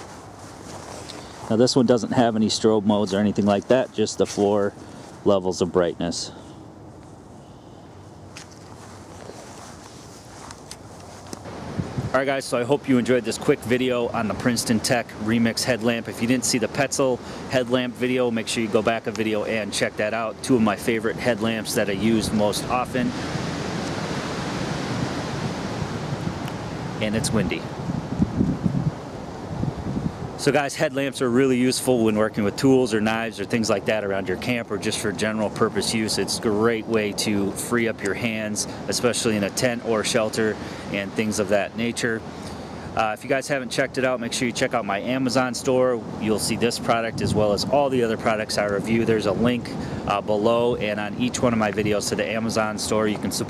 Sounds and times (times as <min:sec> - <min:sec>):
Wind: 0:00.0 - 0:53.5
Speech: 0:01.5 - 0:06.4, 0:12.1 - 0:23.2, 0:27.0 - 0:27.7, 0:30.4 - 0:42.2, 0:43.0 - 0:53.5.